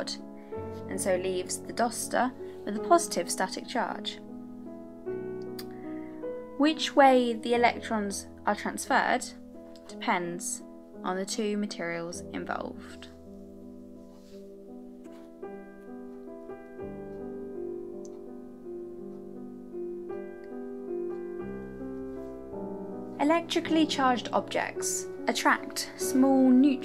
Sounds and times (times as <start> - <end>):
Speech: 0.0 - 0.2, 0.9 - 4.2, 6.6 - 13.2, 23.2 - 26.8
Music: 0.0 - 26.8.